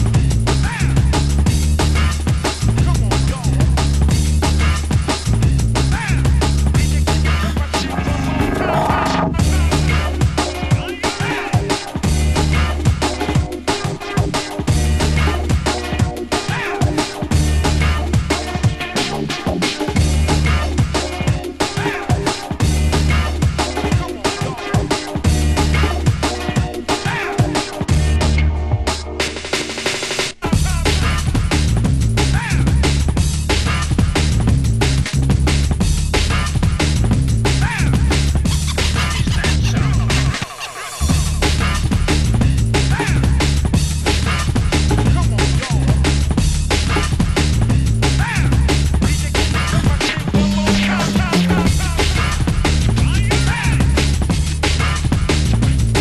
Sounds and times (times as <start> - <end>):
Drum and bass: 0.0 - 56.0.